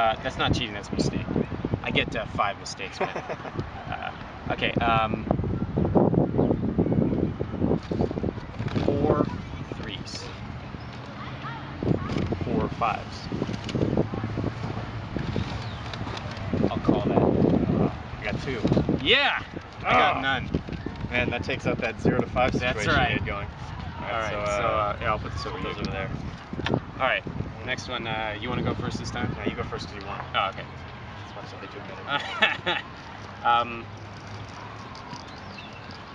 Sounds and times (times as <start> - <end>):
Outside, urban or manmade: 0.0 - 36.1.